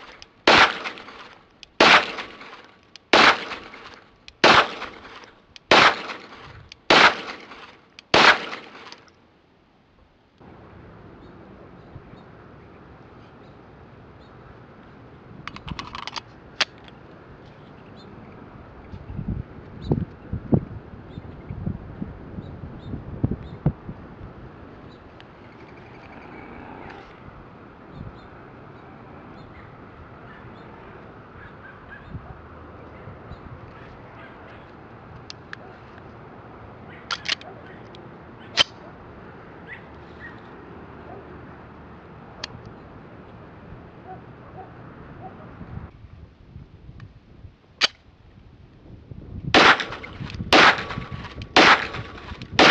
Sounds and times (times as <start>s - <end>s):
Outside, rural or natural: 0.0s - 52.7s.